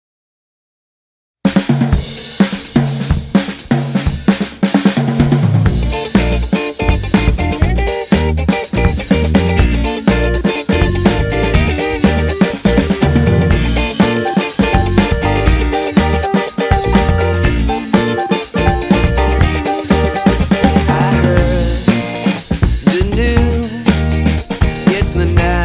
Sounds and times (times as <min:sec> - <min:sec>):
Drum kit: 0:01.5 - 0:25.6
Drum roll: 0:01.5 - 0:25.6
Hi-hat: 0:05.8 - 0:13.0, 0:13.6 - 0:25.6.